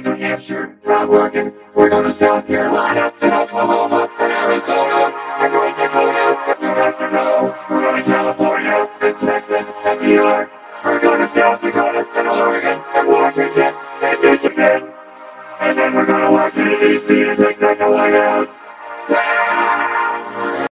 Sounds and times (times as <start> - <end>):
Music: 0.0 - 20.7.